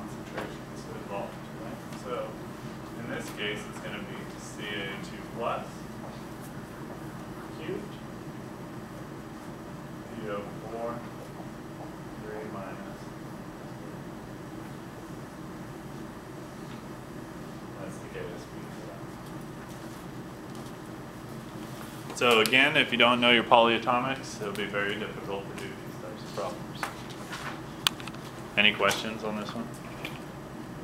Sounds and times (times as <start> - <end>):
Speech: 0.0 - 2.4, 3.0 - 5.9, 7.5 - 8.0, 10.1 - 11.1, 12.2 - 13.2, 17.8 - 19.2, 22.2 - 26.9, 28.6 - 29.8.